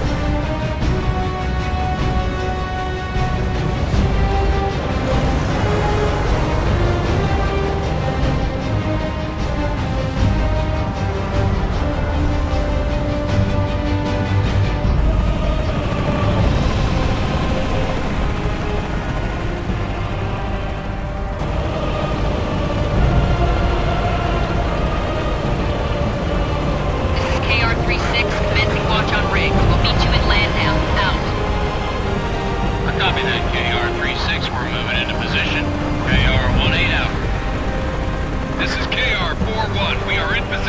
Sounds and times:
Music: 0:00.0 - 0:40.6.

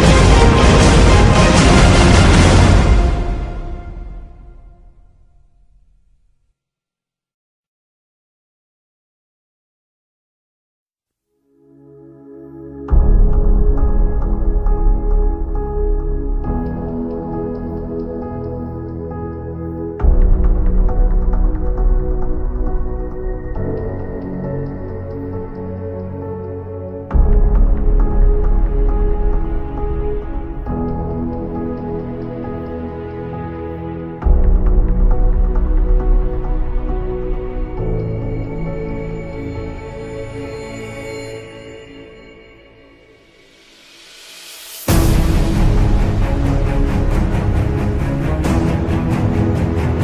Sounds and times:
Music: 0:00.0 - 0:06.8, 0:11.1 - 0:50.0.

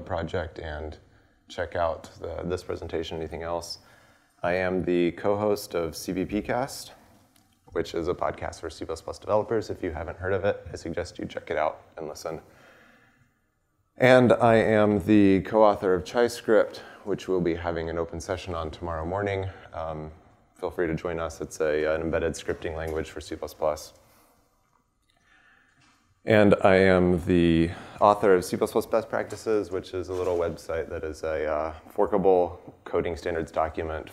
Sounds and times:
Speech: 0:00.0 - 0:07.1, 0:07.7 - 0:12.5, 0:14.0 - 0:24.0, 0:26.2 - 0:34.1.

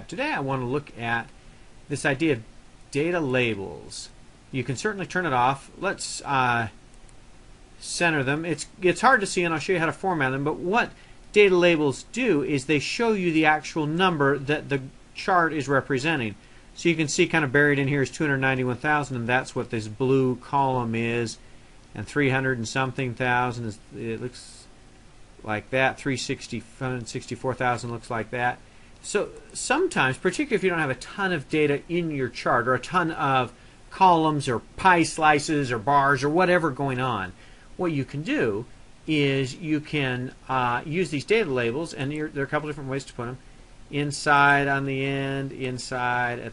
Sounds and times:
Speech: 0:00.0 - 0:06.8, 0:07.8 - 0:21.4, 0:22.0 - 0:24.7, 0:25.4 - 0:46.5.

